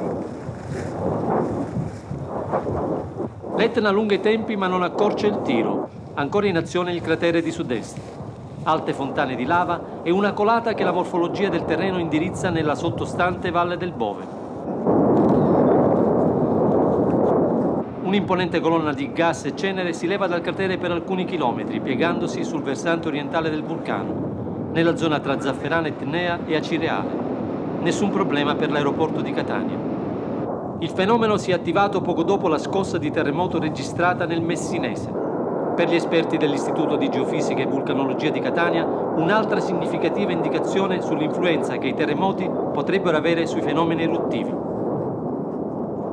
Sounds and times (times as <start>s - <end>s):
Eruption: 0.0s - 46.1s
Speech: 3.6s - 8.0s, 8.7s - 14.3s, 18.0s - 24.1s, 24.8s - 27.1s, 27.8s - 29.8s, 30.8s - 35.2s, 35.8s - 44.6s.